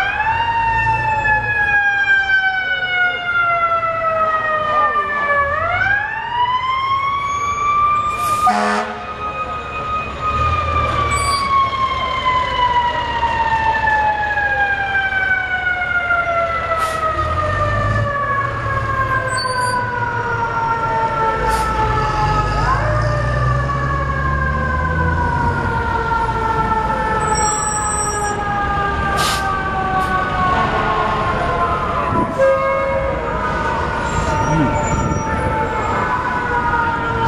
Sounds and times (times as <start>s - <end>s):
Fire engine, fire truck (siren): 0.0s - 37.2s.